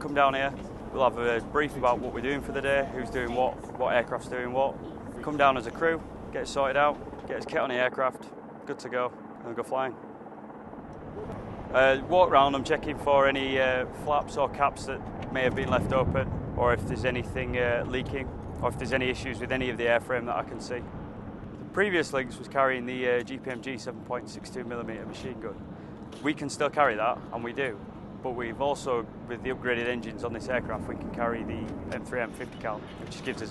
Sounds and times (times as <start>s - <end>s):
Speech: 0.0s - 10.0s, 11.8s - 20.8s, 21.8s - 25.6s, 26.2s - 33.5s.